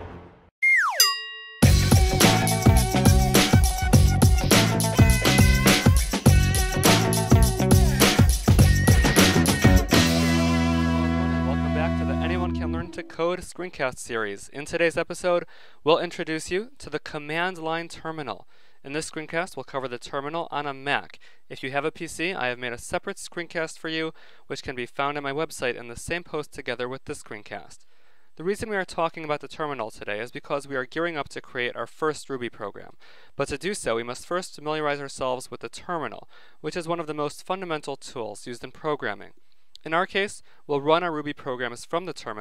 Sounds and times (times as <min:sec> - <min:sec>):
Speech: 0:11.3 - 0:27.8, 0:28.4 - 0:42.4.